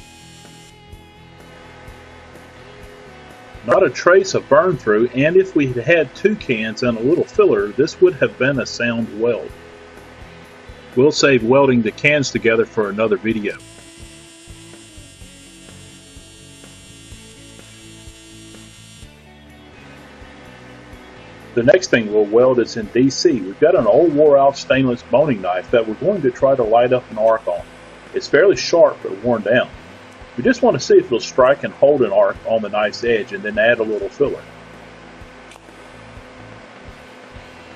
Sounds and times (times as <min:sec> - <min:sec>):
Music: 0:00.0 - 0:37.7
Speech: 0:03.6 - 0:09.5, 0:11.0 - 0:13.6, 0:21.6 - 0:27.6, 0:28.2 - 0:29.8, 0:30.4 - 0:34.5.